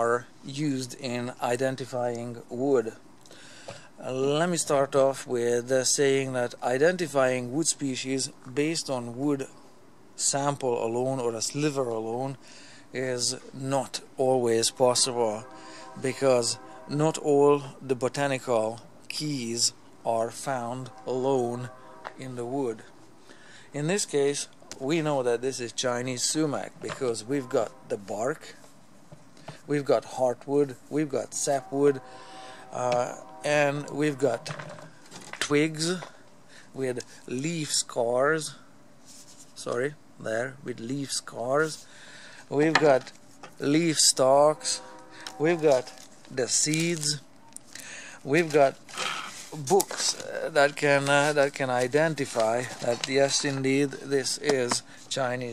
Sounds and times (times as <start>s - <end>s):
Speech: 0.0s - 3.0s, 4.0s - 9.6s, 10.2s - 22.9s, 23.7s - 28.6s, 29.7s - 32.0s, 32.7s - 34.6s, 35.4s - 36.2s, 36.8s - 38.6s, 39.6s - 41.8s, 42.5s - 44.8s, 45.4s - 47.2s, 48.2s - 48.8s, 49.5s - 55.5s.